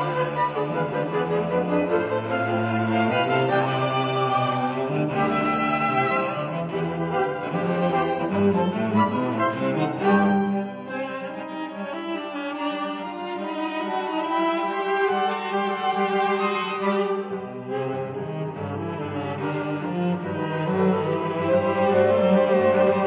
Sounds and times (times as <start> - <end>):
Cello: 0.0 - 23.0
String section: 0.0 - 23.0.